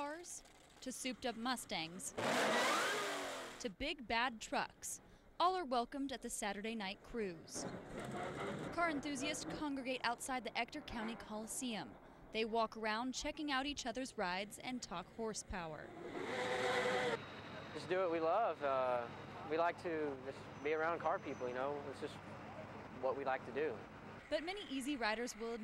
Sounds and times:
Speech: 0.0 - 2.1, 3.6 - 7.6, 8.8 - 15.9, 17.7 - 22.2, 23.0 - 25.6.

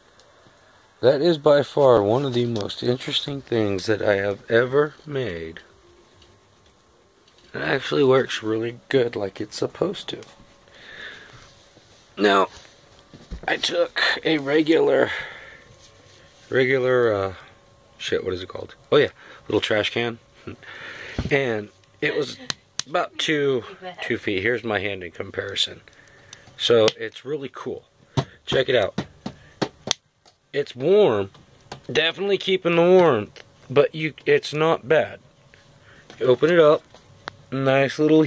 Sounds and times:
Speech: 1.0 - 5.7, 7.5 - 10.3, 12.2 - 12.5, 13.5 - 15.2, 18.0 - 20.2, 21.3 - 25.8, 26.6 - 27.9, 28.5 - 29.0, 30.5 - 31.3, 31.9 - 35.2, 36.2 - 36.8, 37.5 - 38.2.

